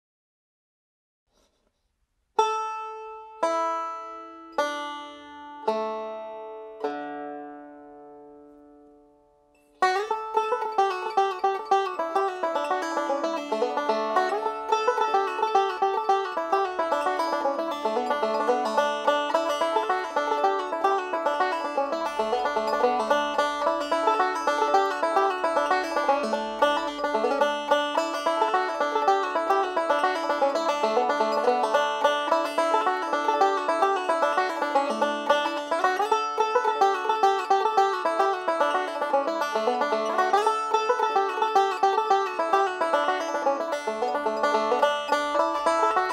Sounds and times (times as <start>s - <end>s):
Banjo: 2.4s - 46.1s.